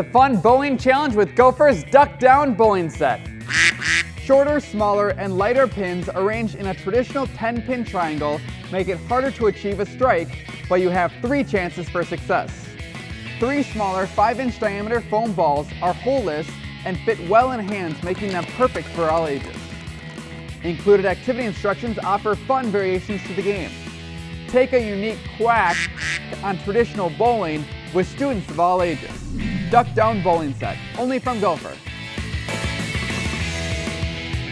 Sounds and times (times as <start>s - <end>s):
Speech: 0.0s - 3.2s, 4.2s - 12.7s, 13.4s - 19.6s, 20.6s - 23.8s, 24.5s - 25.8s, 26.4s - 31.8s
Music: 0.0s - 34.5s
Quack: 3.5s - 4.1s, 25.7s - 26.3s.